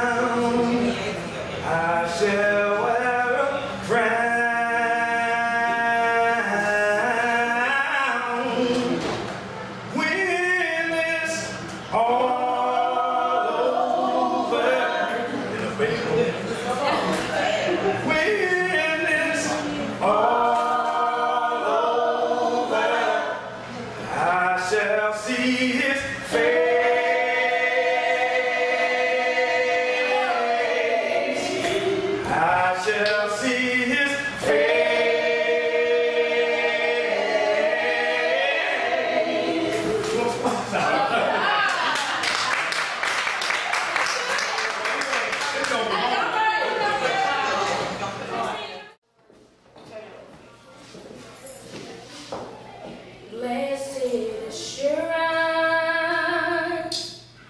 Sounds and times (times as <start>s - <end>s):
Choir: 11.2s - 15.7s, 18.3s - 43.6s.